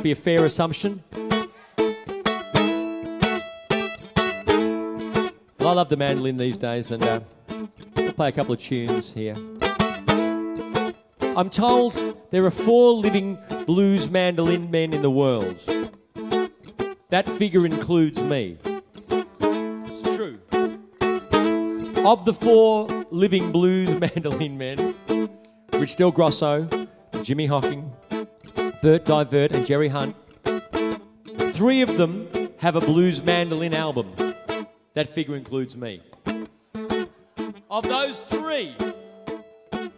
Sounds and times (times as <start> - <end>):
Speech: 0.0 - 1.0, 5.6 - 7.2, 8.2 - 9.4, 11.4 - 15.6, 17.1 - 18.6, 19.9 - 20.4, 22.0 - 24.8, 25.8 - 27.9, 31.6 - 34.2, 35.0 - 36.0, 37.7 - 38.8
Music: 0.0 - 39.9.